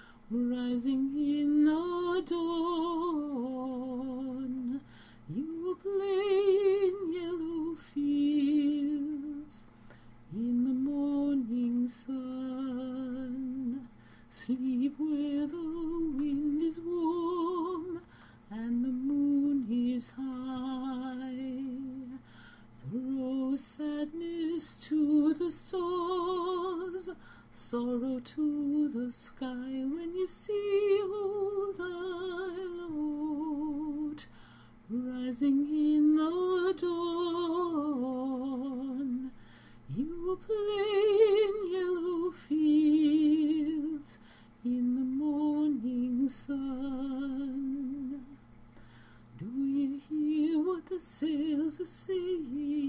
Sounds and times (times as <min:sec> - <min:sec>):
Lullaby: 0:00.0 - 0:52.8.